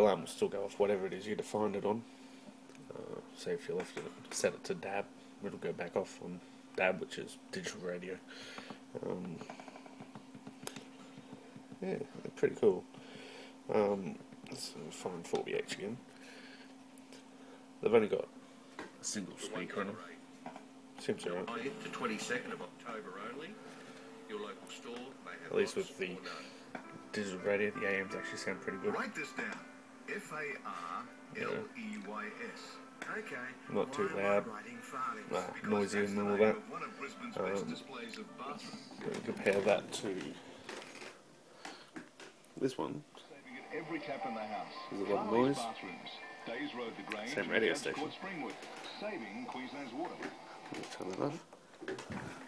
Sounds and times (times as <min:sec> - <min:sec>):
Speech: 0:00.0 - 0:02.0, 0:02.9 - 0:08.2, 0:09.0 - 0:09.4, 0:11.8 - 0:12.8, 0:13.7 - 0:16.0, 0:17.8 - 0:18.3, 0:19.0 - 0:20.2, 0:21.0 - 0:23.6, 0:24.3 - 0:26.5, 0:27.2 - 0:40.4, 0:42.6 - 0:50.2.